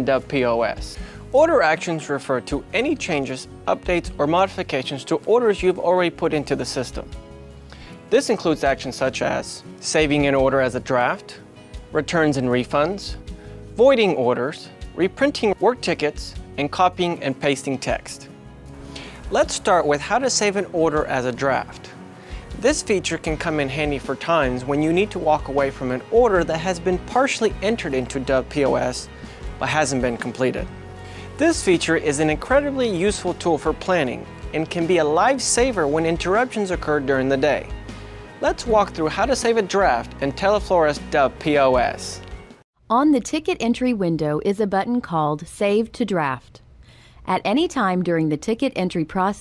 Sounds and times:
Speech: 0:00.0 - 0:07.1, 0:08.1 - 0:11.4, 0:12.0 - 0:13.2, 0:13.8 - 0:18.3, 0:19.3 - 0:22.0, 0:22.6 - 0:30.7, 0:31.4 - 0:37.7, 0:38.4 - 0:42.2, 0:42.9 - 0:46.6, 0:47.3 - 0:49.4
Music: 0:00.0 - 0:49.4.

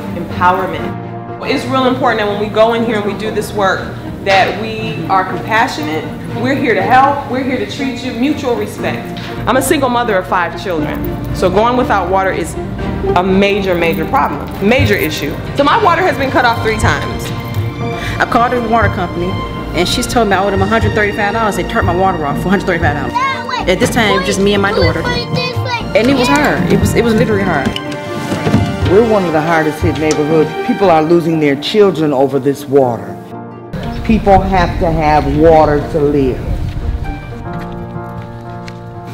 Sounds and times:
Music: 0:00.0 - 0:39.1.

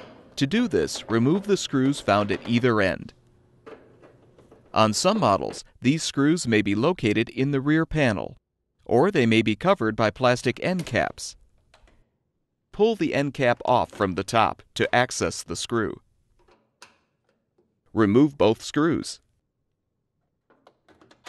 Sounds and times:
Speech: 0:00.4 - 0:03.2, 0:04.8 - 0:11.4, 0:12.8 - 0:16.0, 0:17.9 - 0:19.3.

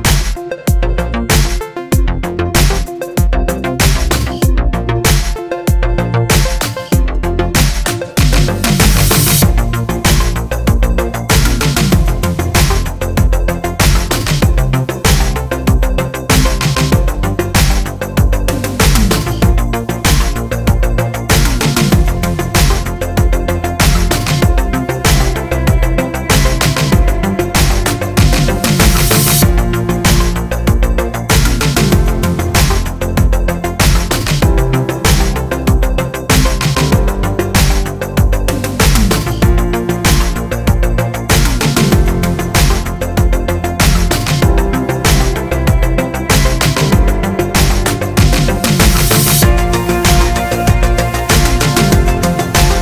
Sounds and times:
Music: 0:00.0 - 0:52.8.

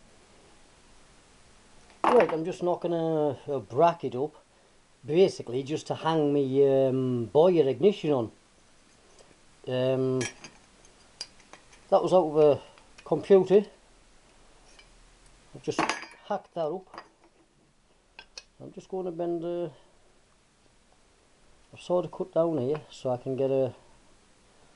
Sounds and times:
Dishes, pots, and pans: 0:10.2 - 0:10.6, 0:15.8 - 0:16.3.

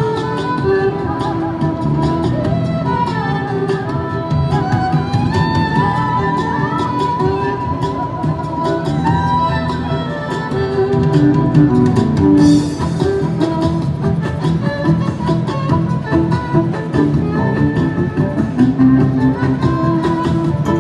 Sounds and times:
Music: 0:00.0 - 0:20.8.

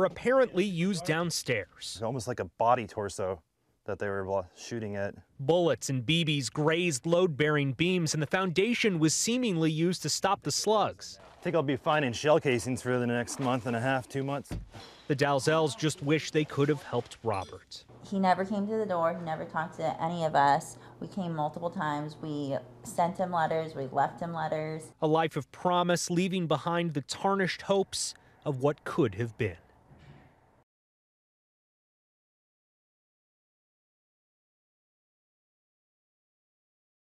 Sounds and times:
Female speech, woman speaking: 0:18.0 - 0:24.9.

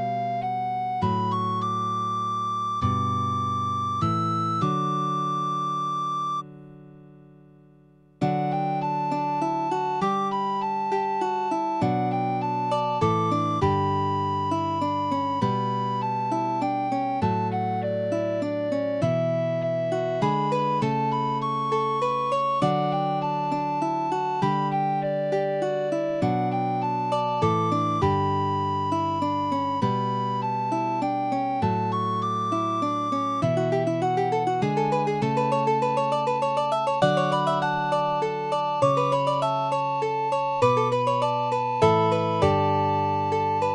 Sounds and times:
Music: 0:00.0 - 0:43.7.

